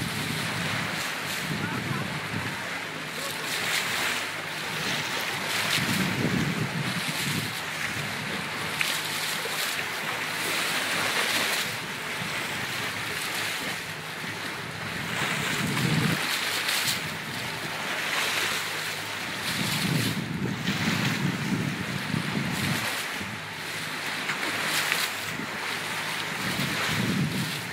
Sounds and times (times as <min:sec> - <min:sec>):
Wind noise (microphone): 0:00.0 - 0:02.7, 0:04.8 - 0:08.5, 0:14.7 - 0:16.3, 0:19.2 - 0:23.4, 0:26.2 - 0:27.7
Waves, surf: 0:00.0 - 0:27.7.